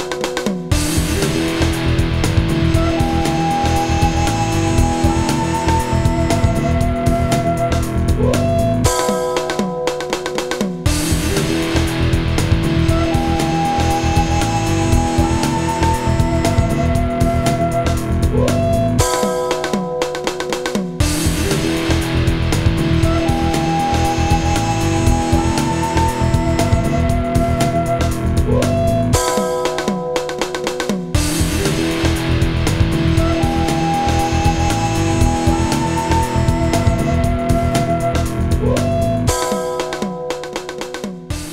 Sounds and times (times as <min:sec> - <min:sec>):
Video game music: 0:10.8 - 0:18.4, 0:31.1 - 0:40.4.